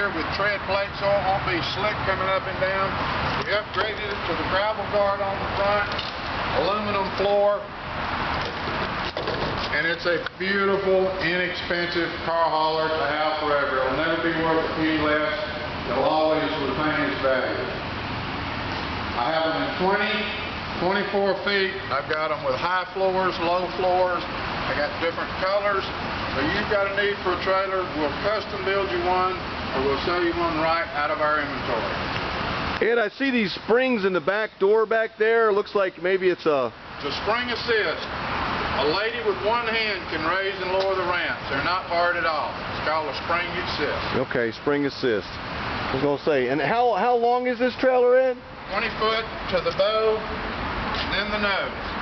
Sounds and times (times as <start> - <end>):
Speech: 0.0 - 6.0, 6.6 - 7.7, 9.7 - 17.8, 19.2 - 32.0, 32.8 - 38.1, 38.8 - 50.3, 51.0 - 51.8
Motor vehicle (road): 0.0 - 52.0.